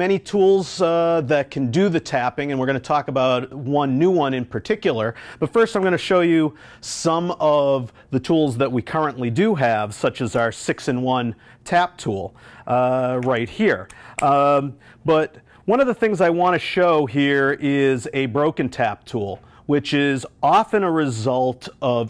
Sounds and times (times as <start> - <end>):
Speech: 0.0 - 22.0.